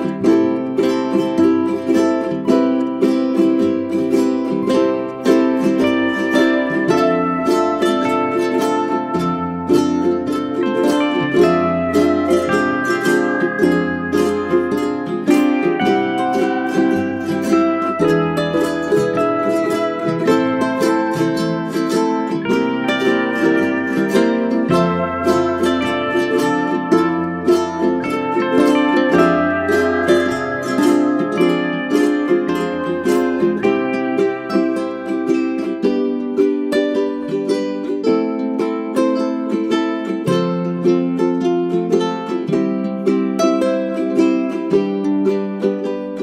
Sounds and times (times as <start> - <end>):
Music: 0.0 - 46.2.